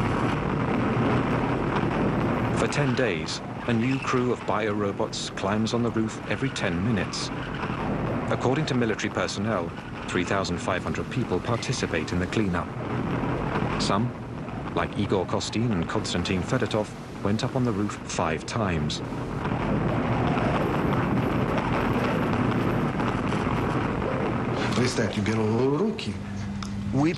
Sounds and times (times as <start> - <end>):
Eruption: 0.0 - 27.1
Speech: 2.6 - 7.3, 8.3 - 12.7, 13.8 - 14.1, 14.8 - 19.1, 24.6 - 26.2, 26.9 - 27.1.